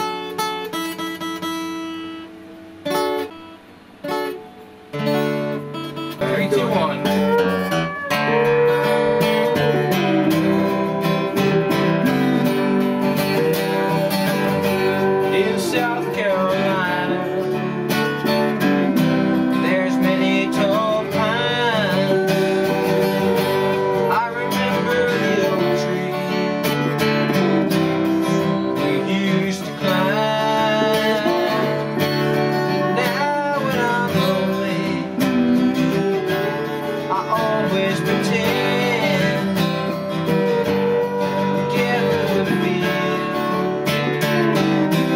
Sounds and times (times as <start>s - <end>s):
Music: 0.0s - 45.1s.